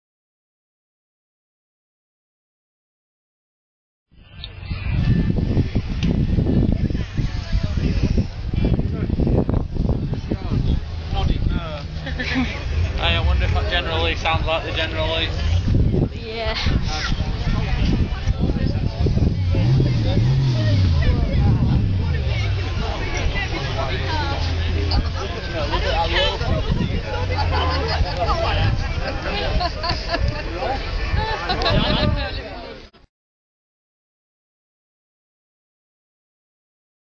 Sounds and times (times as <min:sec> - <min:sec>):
Speech: 0:12.8 - 0:33.0.